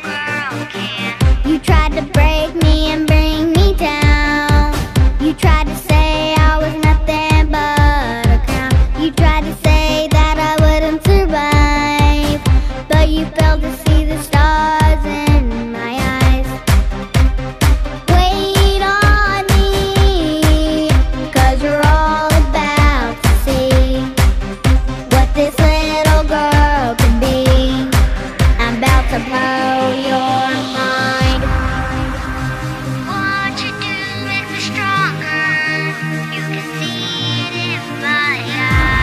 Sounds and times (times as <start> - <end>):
Music: 0.0 - 39.0.